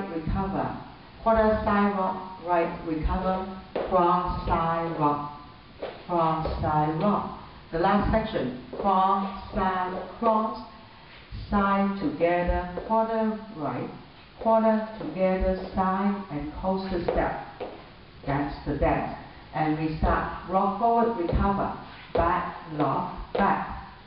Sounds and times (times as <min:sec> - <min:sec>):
Speech: 0:00.0 - 0:05.4, 0:06.1 - 0:10.7, 0:11.4 - 0:17.5, 0:18.2 - 0:23.9.